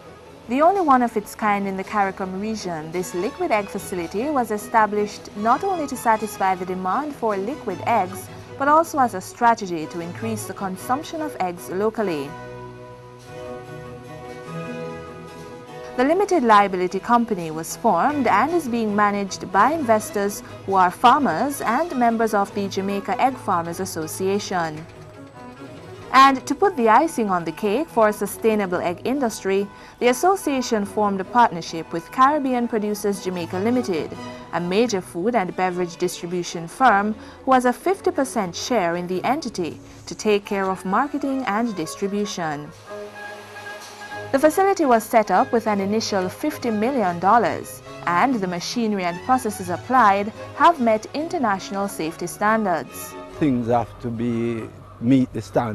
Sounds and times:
Music: 0.0s - 55.7s
Speech: 0.5s - 12.4s, 16.0s - 24.8s, 26.2s - 42.7s, 44.4s - 55.7s.

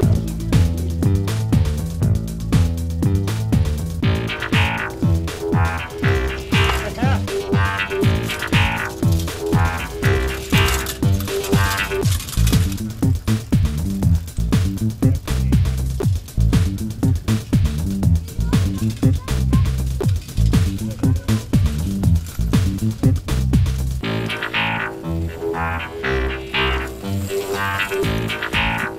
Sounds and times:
Music: 0.0s - 28.9s
Speech: 6.7s - 7.3s, 15.0s - 15.7s, 18.1s - 19.8s, 20.6s - 21.8s.

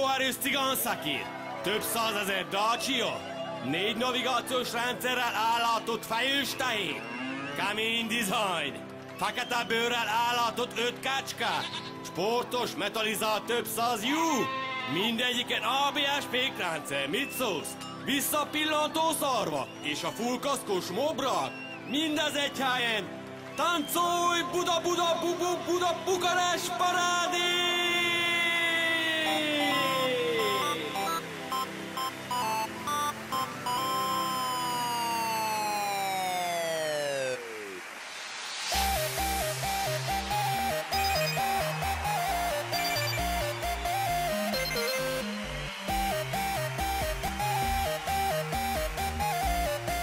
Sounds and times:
Speech: 0.0s - 7.0s, 7.6s - 30.8s
Music: 0.0s - 50.0s.

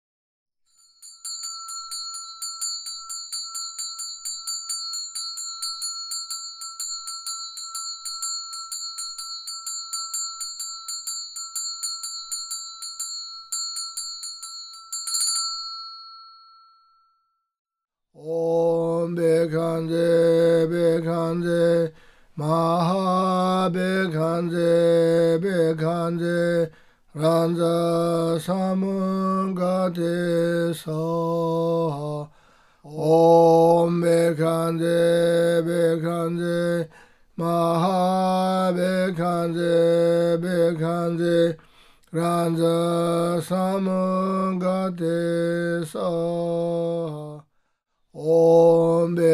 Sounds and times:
Mantra: 18.2s - 32.3s, 32.9s - 41.6s, 42.2s - 47.4s, 48.2s - 49.3s.

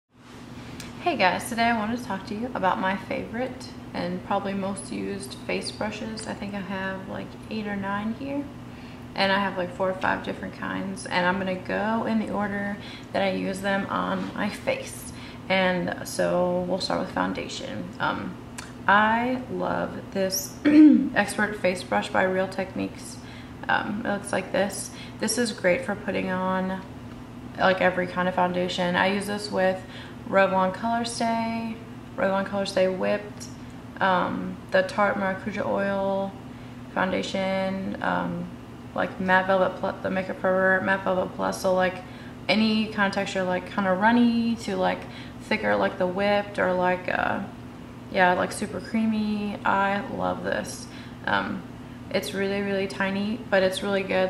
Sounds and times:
Speech: 1.0s - 8.5s, 9.2s - 26.9s, 27.6s - 47.5s, 48.1s - 54.2s.

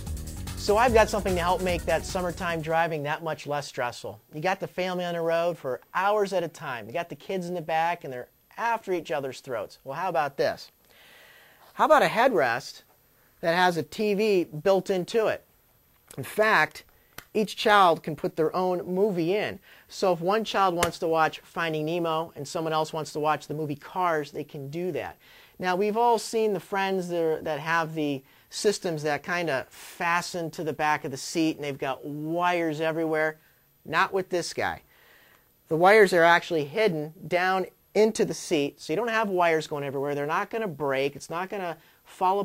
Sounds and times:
Speech: 0.6s - 10.8s, 11.8s - 15.5s, 16.1s - 34.8s, 35.7s - 42.4s.

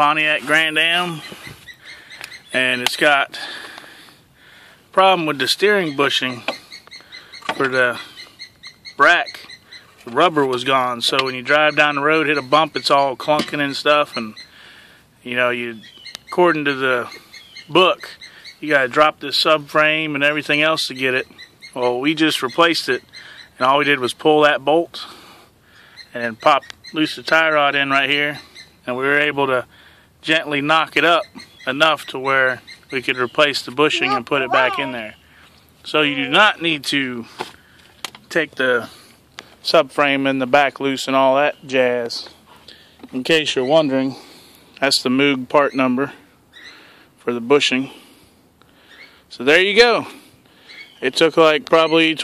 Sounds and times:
Outside, rural or natural: 0.0s - 52.2s.

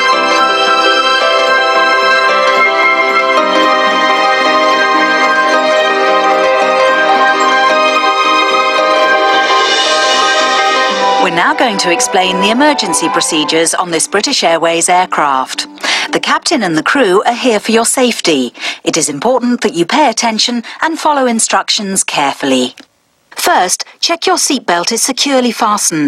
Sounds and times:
Music: 0.0s - 17.9s
Speech: 11.2s - 22.8s, 23.4s - 26.0s.

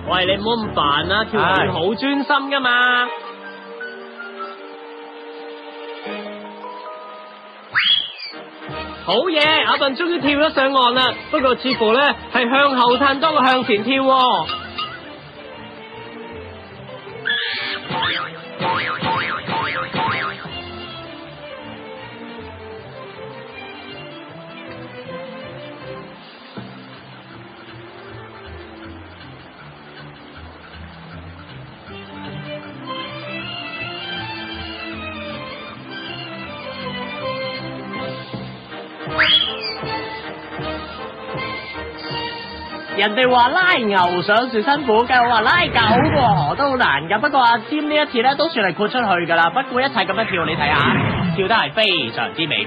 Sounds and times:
Music: 0.0s - 52.6s.

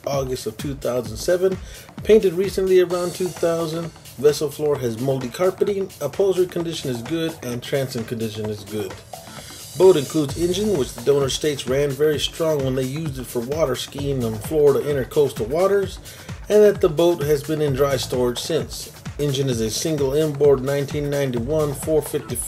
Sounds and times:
Speech: 0.0s - 9.0s, 9.8s - 22.4s
Music: 0.0s - 22.4s.

